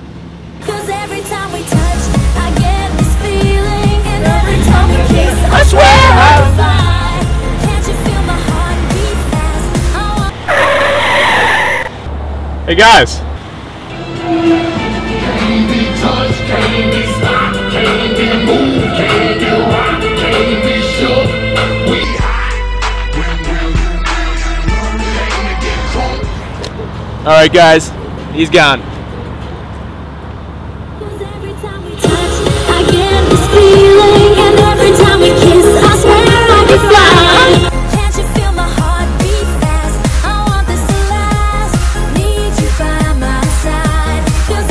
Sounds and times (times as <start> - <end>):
Music: 0.6 - 10.3, 13.9 - 26.6, 31.5 - 44.7.